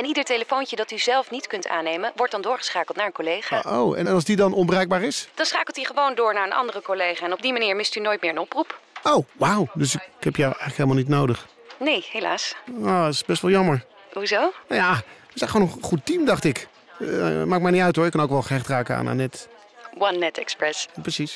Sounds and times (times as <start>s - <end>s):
Speech: 0.0s - 13.8s, 14.7s - 21.3s.